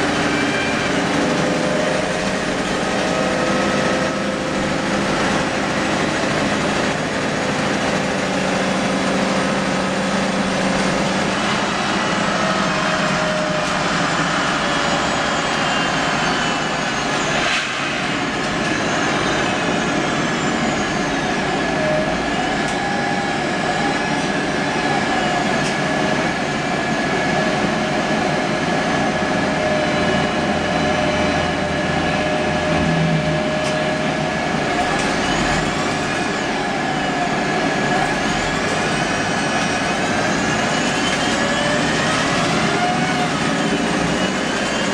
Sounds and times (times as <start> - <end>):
Bus: 0.0 - 44.9.